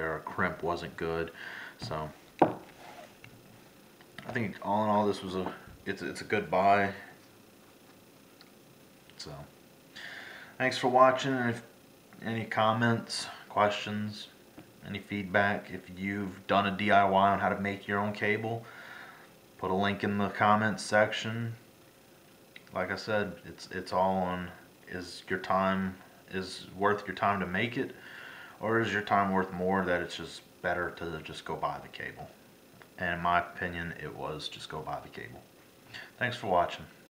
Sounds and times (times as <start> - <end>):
Speech: 0.0 - 2.2, 4.2 - 7.1, 9.2 - 9.5, 10.6 - 18.7, 19.6 - 21.6, 22.7 - 28.0, 28.6 - 32.4, 33.0 - 35.5, 36.2 - 37.0
Inside, small room: 0.0 - 37.1.